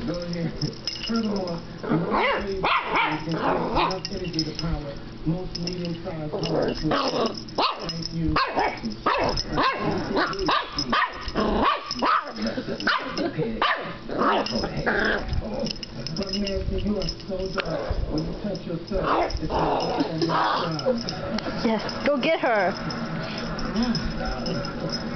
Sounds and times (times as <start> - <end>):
Speech: 0.0 - 11.1, 14.5 - 22.8
Inside, small room: 0.0 - 25.1
Bark: 2.2 - 3.2, 7.6 - 14.5
Yip: 7.6 - 12.3, 12.9 - 14.4
Bow-wow: 8.4 - 12.3.